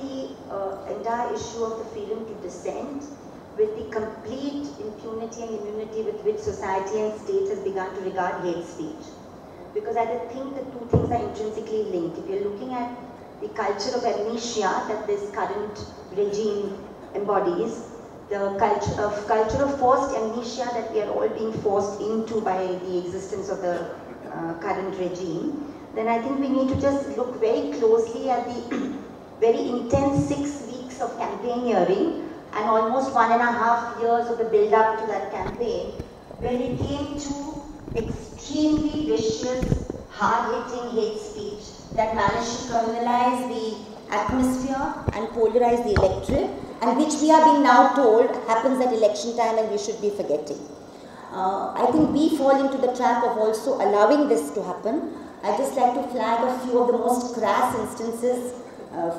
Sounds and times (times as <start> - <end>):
Female speech, woman speaking: 0.0 - 9.2, 9.8 - 50.7, 51.3 - 59.1
Narration, monologue: 0.0 - 59.1.